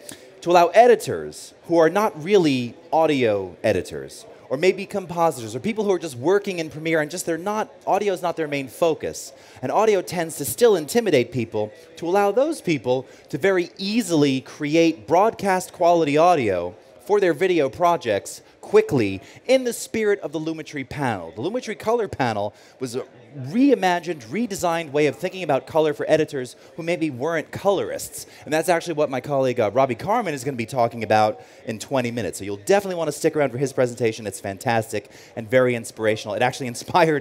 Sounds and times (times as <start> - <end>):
Speech: 0.0 - 37.2.